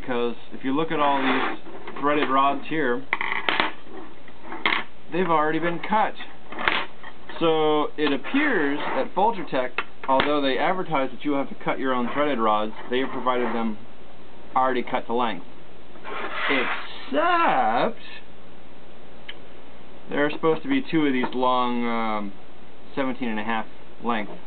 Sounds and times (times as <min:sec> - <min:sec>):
Speech: 0:00.0 - 0:03.1, 0:05.1 - 0:06.4, 0:07.3 - 0:13.8, 0:14.6 - 0:15.5, 0:16.5 - 0:18.3, 0:20.1 - 0:24.4.